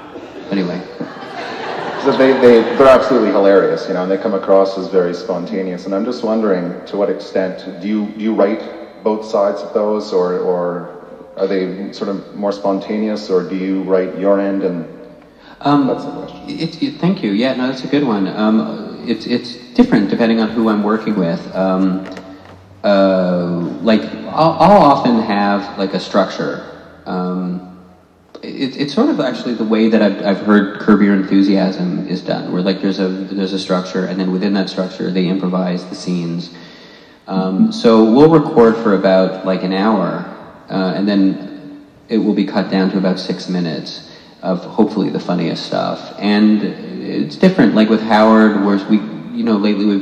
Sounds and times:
Speech: 0.0 - 1.0, 1.8 - 22.2, 22.8 - 27.7, 28.4 - 36.7, 37.3 - 50.0.

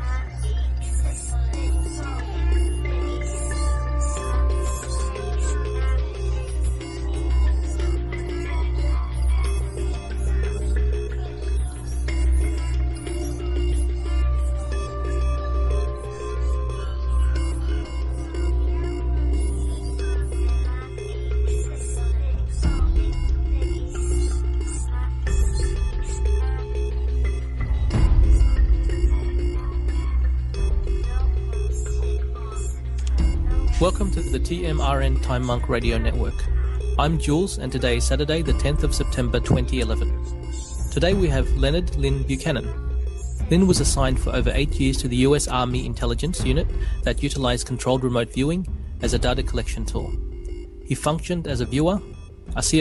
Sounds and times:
Music: 0.0 - 52.8.

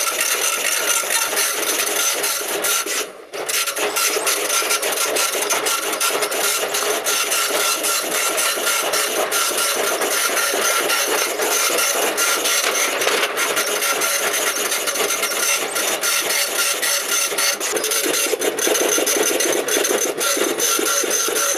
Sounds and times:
Printer: 0.0 - 21.5.

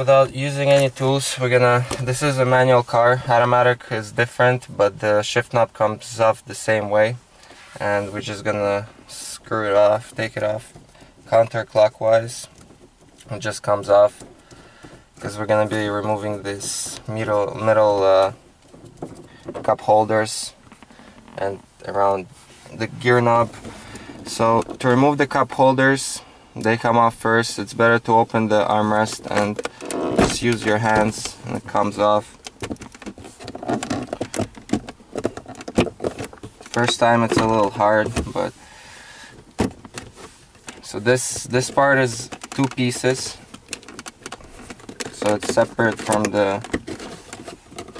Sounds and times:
Speech: 0.0 - 7.2, 7.8 - 10.7, 11.3 - 12.5, 13.3 - 14.2, 15.2 - 18.4, 19.6 - 20.6, 21.4 - 23.6, 24.3 - 29.6, 30.2 - 32.3, 36.8 - 38.5, 40.8 - 43.4, 45.2 - 46.7.

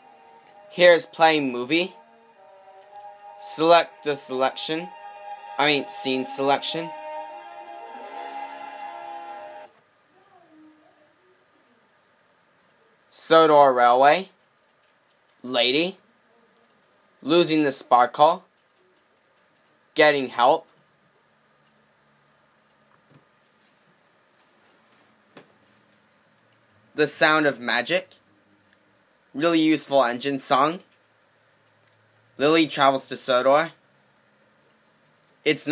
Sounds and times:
Speech: 0.8 - 2.0, 3.4 - 4.9, 5.6 - 6.9, 12.7 - 14.4, 15.4 - 18.5, 20.0 - 20.7, 27.0 - 28.2, 29.4 - 30.9, 32.4 - 33.8, 35.5 - 35.7.

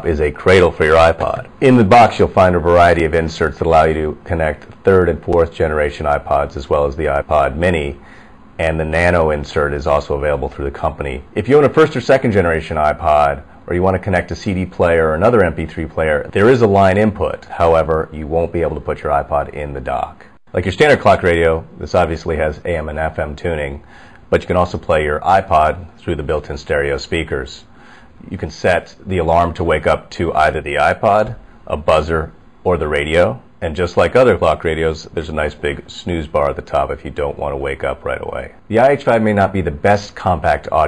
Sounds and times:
Speech: 0.0 - 8.0, 8.6 - 40.8.

